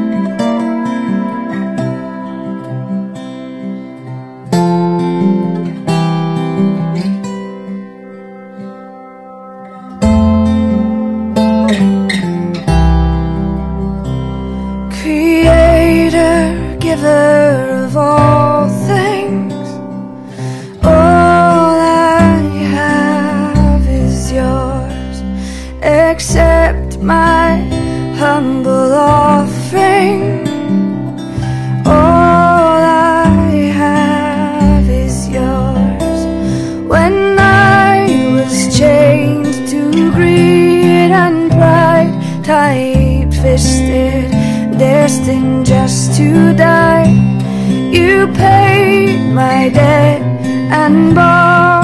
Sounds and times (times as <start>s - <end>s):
Music: 0.0s - 51.8s.